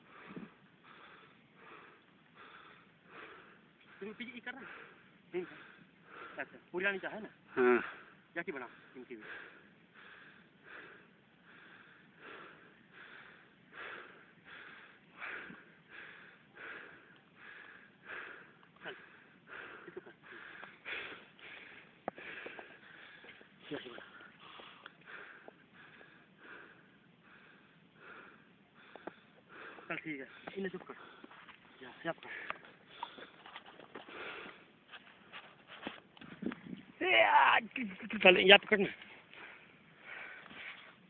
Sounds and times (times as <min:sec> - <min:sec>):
Speech: 0:23.7 - 0:24.1, 0:29.9 - 0:31.0, 0:37.0 - 0:39.0.